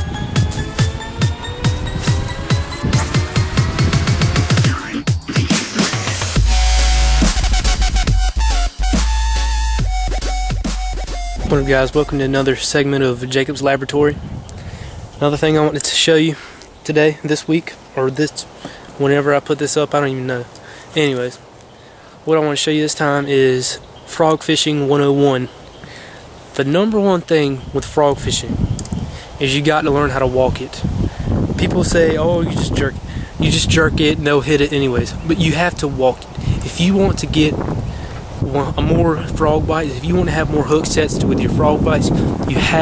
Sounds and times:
Speech: 0:11.4 - 0:14.2, 0:15.2 - 0:21.4, 0:22.3 - 0:25.5, 0:26.6 - 0:28.6, 0:29.4 - 0:30.9, 0:31.6 - 0:37.6, 0:38.4 - 0:42.8.

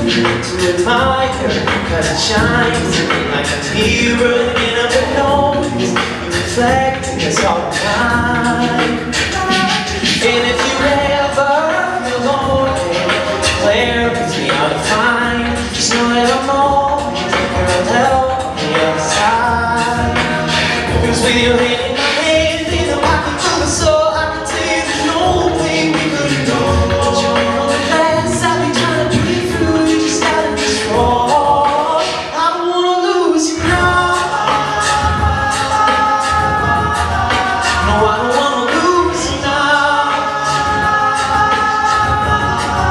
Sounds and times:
Music: 0:00.0 - 0:42.9.

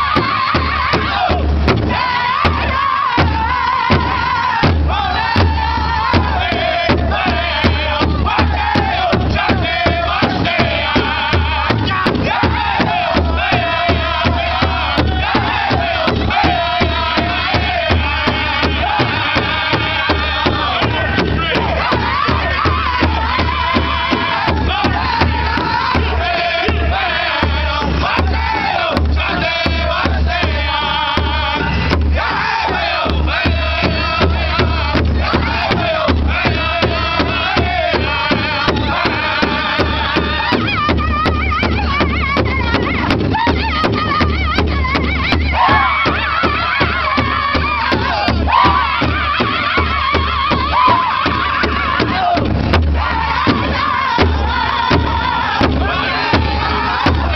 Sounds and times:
Music: 0:00.0 - 0:57.3.

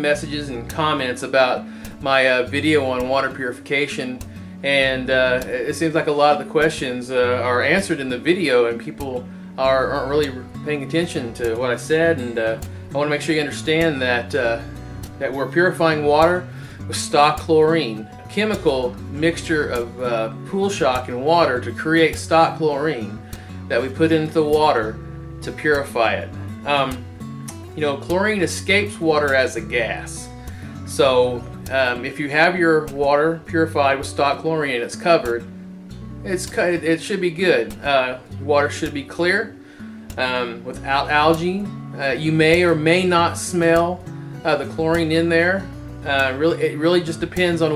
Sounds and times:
Speech: 0:00.0 - 0:27.0, 0:27.8 - 0:30.3, 0:30.9 - 0:35.5, 0:36.2 - 0:39.5, 0:40.2 - 0:47.7
Music: 0:00.0 - 0:47.7.

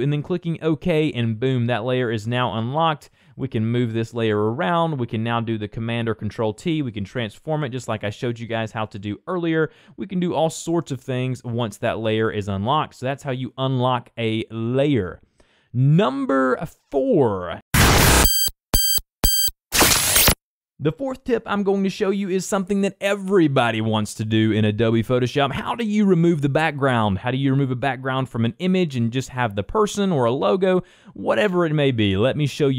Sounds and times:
Speech: 0:00.0 - 0:15.2, 0:15.8 - 0:17.6, 0:20.8 - 0:32.7.

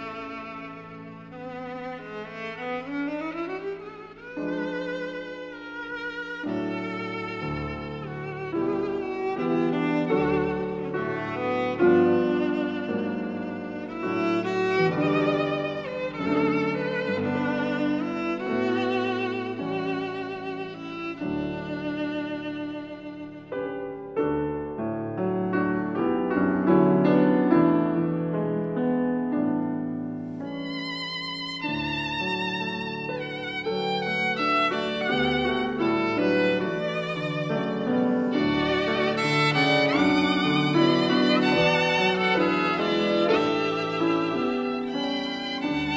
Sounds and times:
Violin, fiddle: 0:00.0 - 0:28.4, 0:30.1 - 0:45.9.

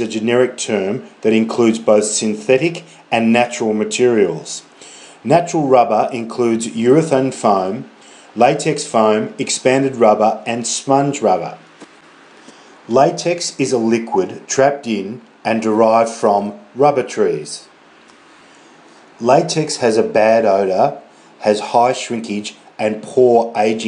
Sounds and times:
Speech: 0:00.0 - 0:11.7, 0:12.9 - 0:17.7, 0:19.2 - 0:23.8.

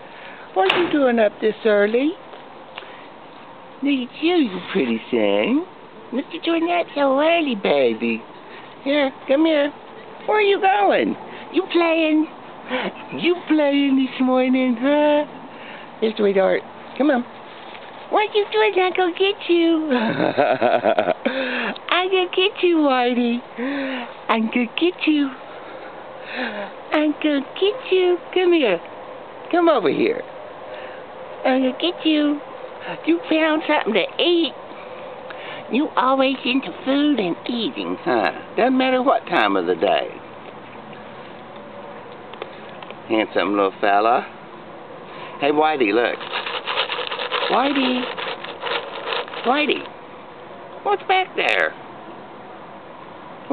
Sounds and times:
Speech: 0:00.6 - 0:02.2, 0:03.8 - 0:08.2, 0:08.8 - 0:12.3, 0:13.1 - 0:15.3, 0:18.1 - 0:19.9, 0:21.8 - 0:23.5, 0:24.3 - 0:25.4, 0:26.6 - 0:28.9, 0:31.4 - 0:34.6, 0:35.7 - 0:40.2, 0:45.4 - 0:46.2, 0:47.4 - 0:48.1, 0:49.4 - 0:49.9, 0:50.8 - 0:51.8.

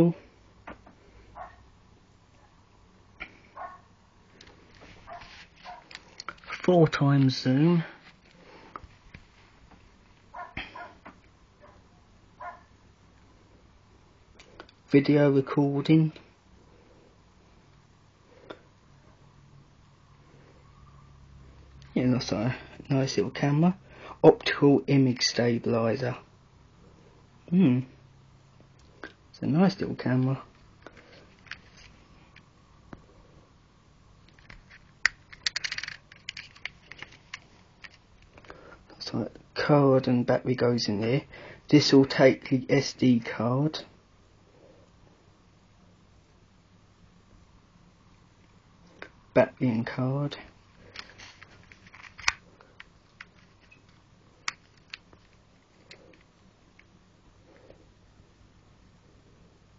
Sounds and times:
Speech: 0:00.0 - 0:00.2, 0:06.5 - 0:08.0, 0:14.9 - 0:16.3, 0:22.0 - 0:26.3, 0:27.5 - 0:28.0, 0:29.3 - 0:30.5, 0:39.0 - 0:43.9, 0:49.4 - 0:50.5.

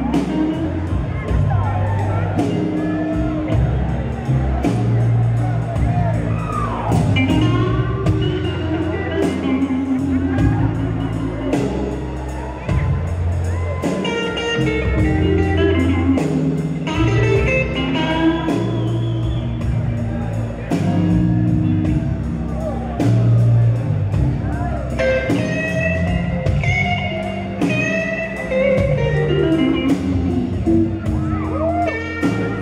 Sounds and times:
Speech: 0:00.0 - 0:16.3
Blues: 0:00.0 - 0:32.6.

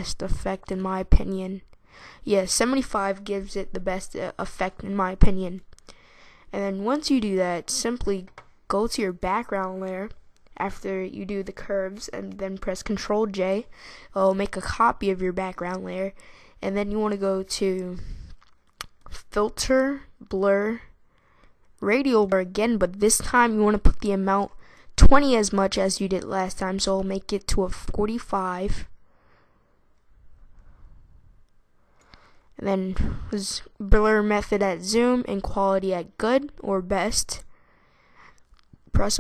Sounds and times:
Speech: 0:00.0 - 0:05.7, 0:06.5 - 0:18.4, 0:19.0 - 0:20.9, 0:21.8 - 0:28.9, 0:32.6 - 0:37.5, 0:38.9 - 0:39.2.

